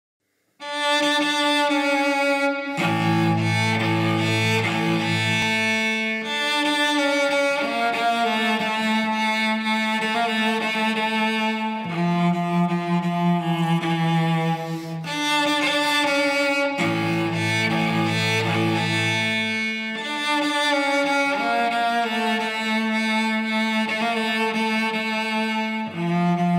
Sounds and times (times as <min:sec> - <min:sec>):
Cello: 0:00.6 - 0:26.5.